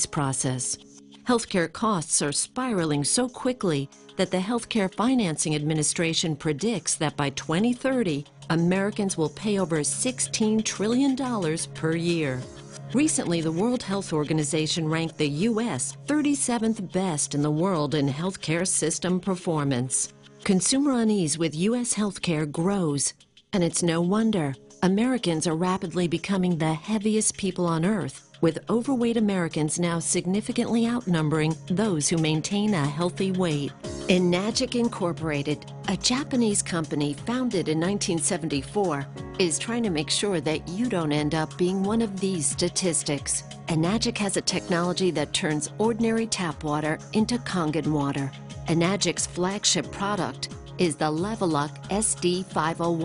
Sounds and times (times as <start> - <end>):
Music: 0.0 - 53.0
Speech: 0.0 - 53.0.